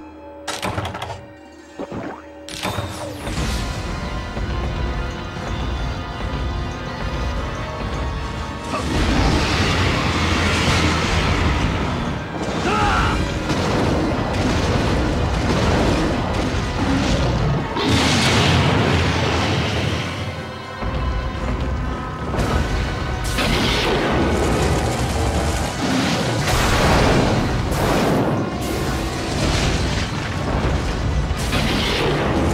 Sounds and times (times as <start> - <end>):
Music: 0.0 - 32.5.